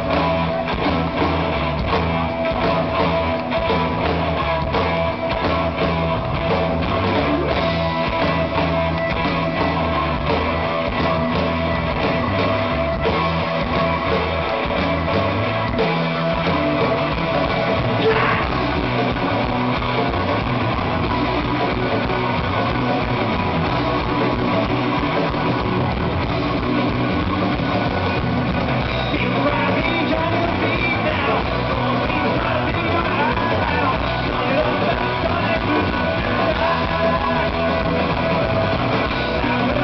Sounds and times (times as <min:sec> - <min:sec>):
Music: 0:00.0 - 0:39.8.